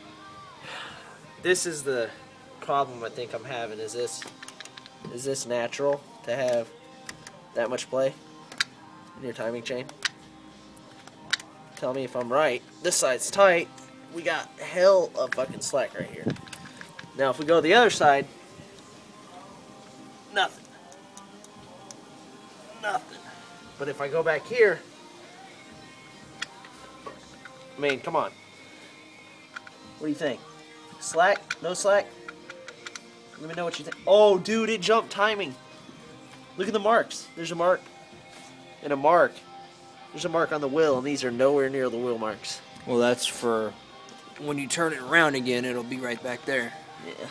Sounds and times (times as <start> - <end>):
Music: 0.0 - 47.3
Speech: 31.0 - 32.1, 44.4 - 47.3.